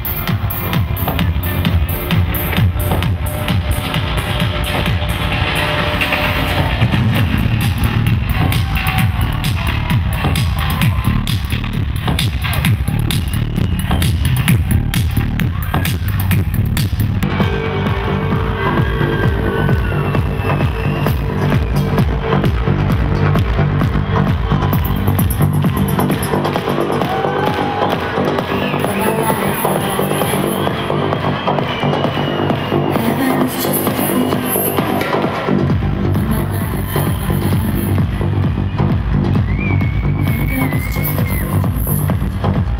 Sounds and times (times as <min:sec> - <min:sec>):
Music: 0:00.0 - 0:42.7.